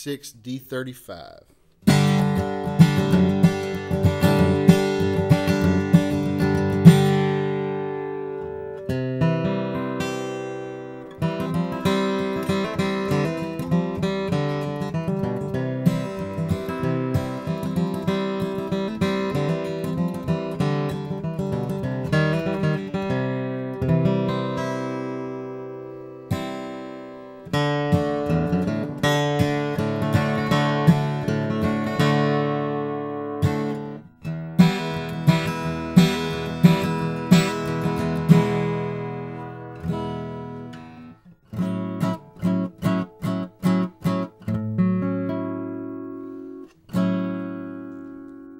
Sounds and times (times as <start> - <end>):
Guitar: 0.0 - 48.6.